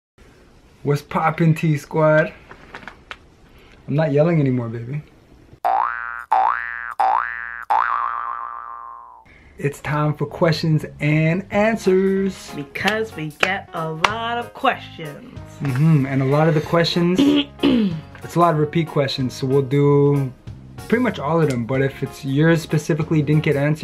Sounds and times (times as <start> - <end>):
Inside, small room: 0.2 - 6.4
Speech: 0.8 - 2.4, 3.9 - 5.1, 9.6 - 15.3, 16.0 - 17.3, 18.3 - 20.3, 20.9 - 23.8
Boing: 5.6 - 9.3.